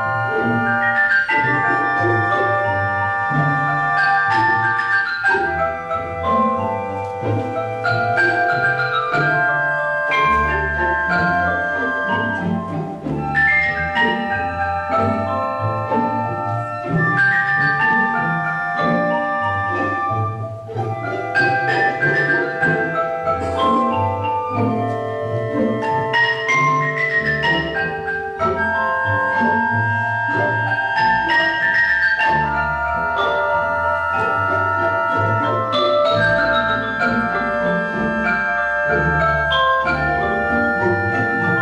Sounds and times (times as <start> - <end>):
Marimba, xylophone: 0.0 - 41.6
Orchestra: 0.0 - 41.6.